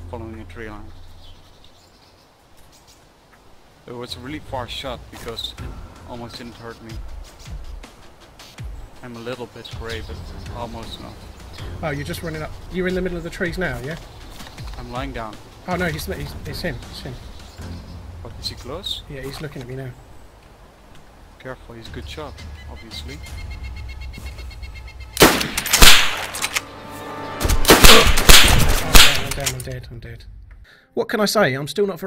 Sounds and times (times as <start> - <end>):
Speech: 0.0 - 1.0, 3.9 - 7.0, 9.0 - 14.0, 14.8 - 17.2, 18.2 - 20.0, 21.4 - 23.2, 28.8 - 30.3, 31.0 - 32.0
Music: 0.0 - 1.6, 3.9 - 20.2, 21.4 - 32.0.